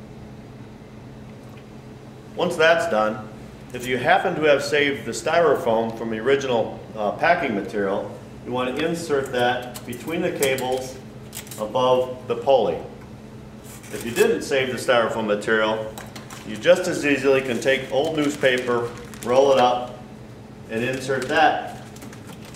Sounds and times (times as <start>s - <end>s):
Speech: 2.4s - 11.0s, 11.6s - 13.0s, 13.9s - 20.0s, 20.7s - 21.8s.